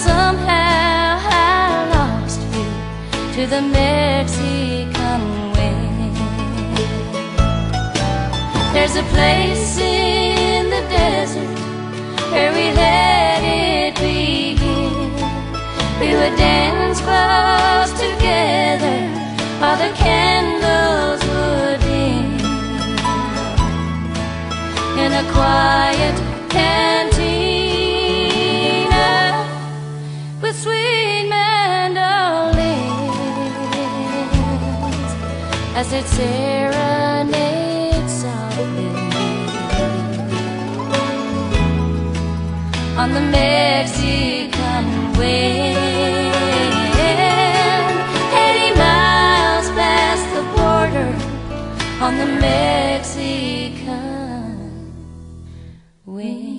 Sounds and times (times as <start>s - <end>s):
Country: 0.0s - 55.8s.